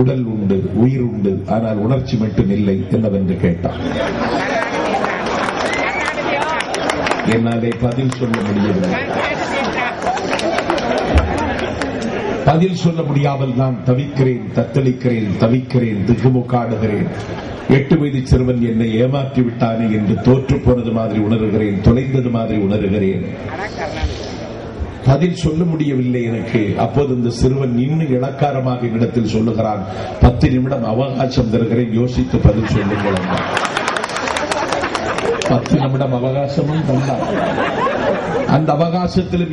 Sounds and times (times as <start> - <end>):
Male speech, man speaking: 0.0 - 3.8, 7.2 - 9.9, 12.4 - 23.4, 25.1 - 33.5, 35.4 - 37.3, 38.5 - 39.5
Narration, monologue: 0.0 - 3.8, 7.2 - 9.2, 12.4 - 34.0, 35.2 - 39.5.